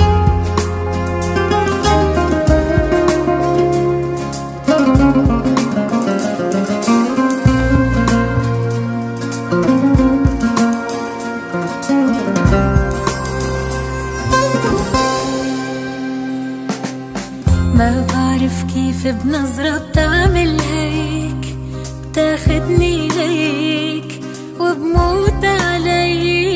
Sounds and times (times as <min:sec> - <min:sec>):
Zither: 0:00.0 - 0:19.8.